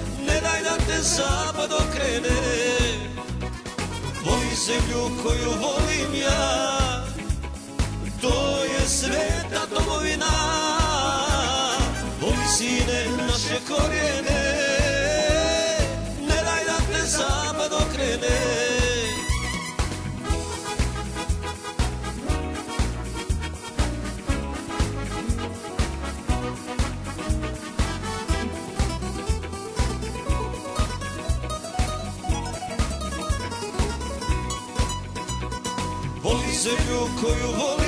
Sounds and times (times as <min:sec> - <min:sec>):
Folk music: 0:00.0 - 0:37.8.